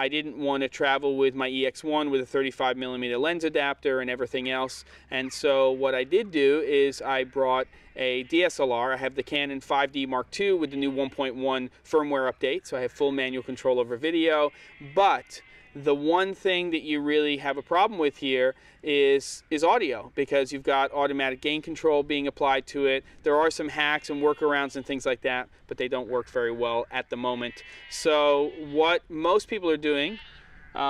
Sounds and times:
Speech: 0.0s - 30.2s.

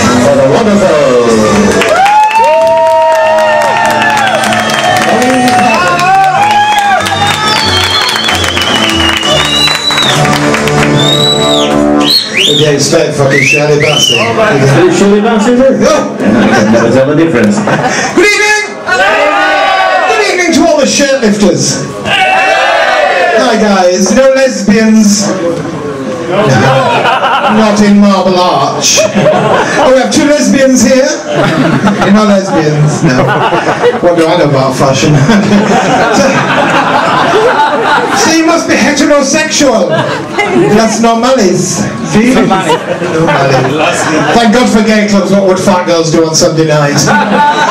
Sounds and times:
Speech: 12.5s - 17.6s, 20.1s - 21.8s, 23.4s - 25.4s, 27.5s - 29.1s, 29.8s - 31.2s, 34.0s - 35.2s, 38.2s - 40.0s, 40.6s - 43.7s, 44.3s - 47.1s.

